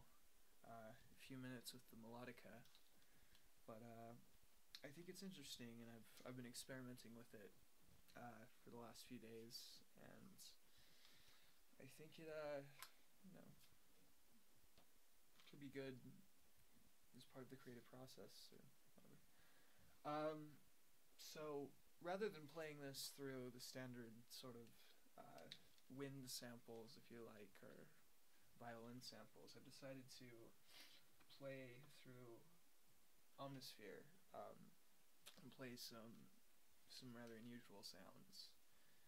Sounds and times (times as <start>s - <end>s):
Speech: 0.6s - 2.8s, 3.7s - 10.6s, 11.8s - 13.7s, 15.4s - 16.2s, 17.1s - 19.2s, 20.0s - 20.6s, 21.2s - 28.0s, 28.6s - 30.6s, 31.2s - 32.6s, 33.4s - 38.6s.